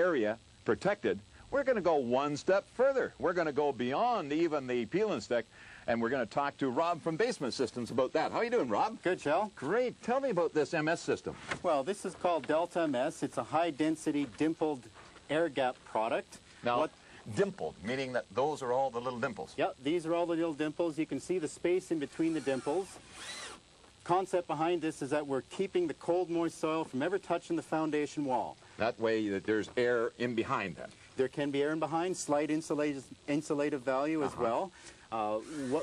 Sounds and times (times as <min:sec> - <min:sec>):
Speech: 0:00.0 - 0:23.0, 0:24.0 - 0:35.8.